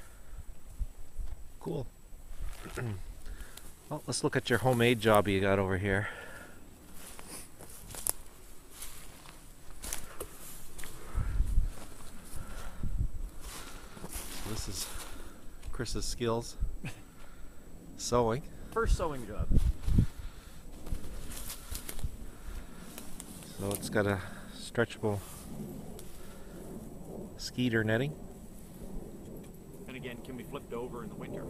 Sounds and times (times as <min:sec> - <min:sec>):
Outside, rural or natural: 0:00.0 - 0:31.4
Speech: 0:01.6 - 0:01.9, 0:02.6 - 0:03.0, 0:03.9 - 0:06.1, 0:14.4 - 0:14.9, 0:15.7 - 0:16.6, 0:18.0 - 0:19.5, 0:23.5 - 0:25.2, 0:27.4 - 0:28.2, 0:29.9 - 0:31.4.